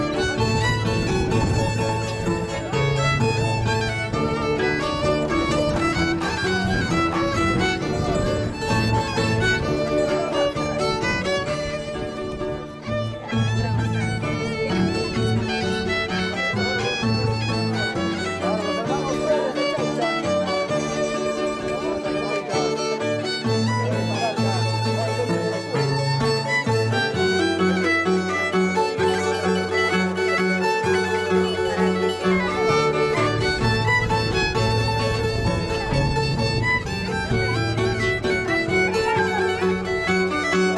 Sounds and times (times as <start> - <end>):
Violin, fiddle: 0.0 - 40.7
Speech: 0.2 - 40.7.